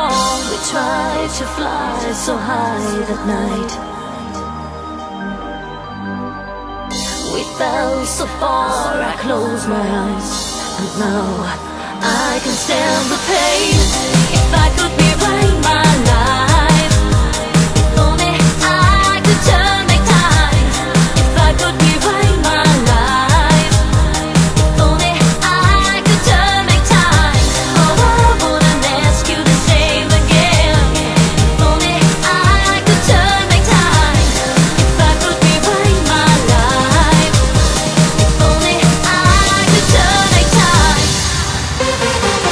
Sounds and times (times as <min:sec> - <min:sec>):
Music: 0:00.0 - 0:42.5.